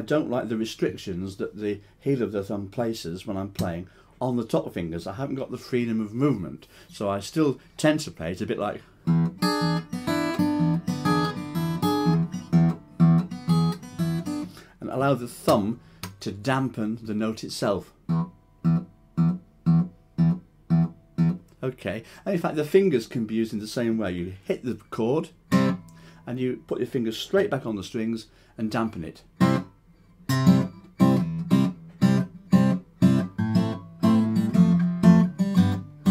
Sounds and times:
Speech: 0.0 - 8.8, 14.8 - 18.0, 21.6 - 25.4, 26.3 - 29.3
Inside, small room: 0.0 - 36.1
Acoustic guitar: 8.8 - 16.8, 17.5 - 22.3, 24.4 - 26.8, 28.8 - 36.1.

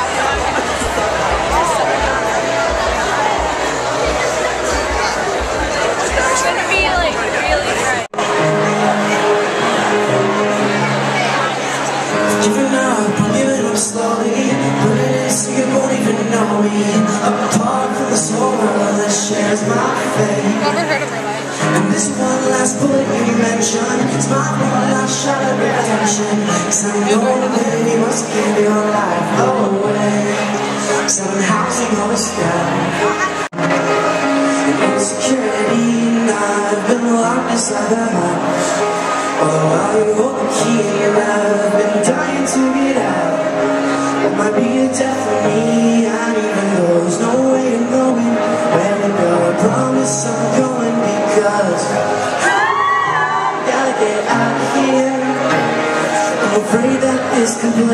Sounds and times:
Speech: 0.0 - 52.4
Music: 0.0 - 57.9.

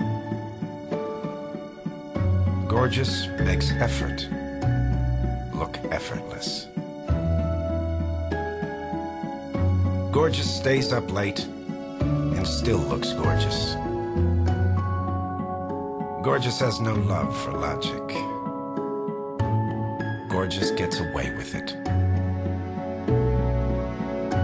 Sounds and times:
Music: 0.0 - 24.4
Speech: 2.7 - 4.3, 5.5 - 6.7, 10.1 - 11.5, 12.3 - 13.8, 16.2 - 18.4, 20.3 - 21.8.

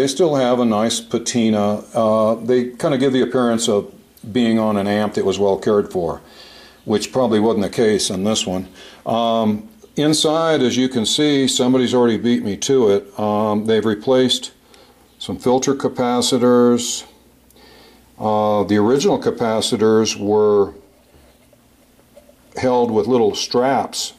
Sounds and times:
Speech: 0.0 - 14.6, 15.2 - 17.2, 18.2 - 20.9, 22.5 - 24.1.

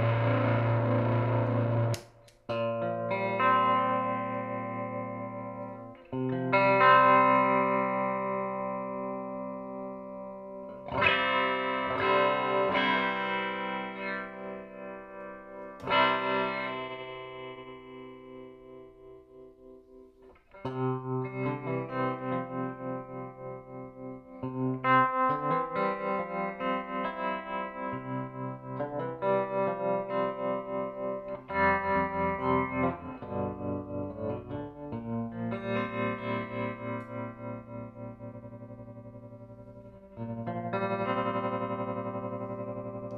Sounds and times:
Effects unit: 0.0 - 43.1
Guitar: 0.0 - 43.1.

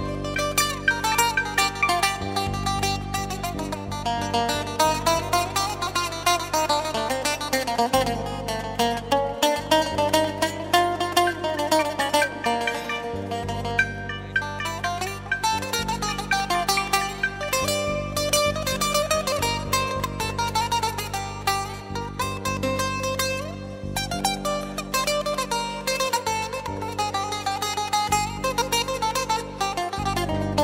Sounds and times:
Plucked string instrument: 0.0 - 30.6.

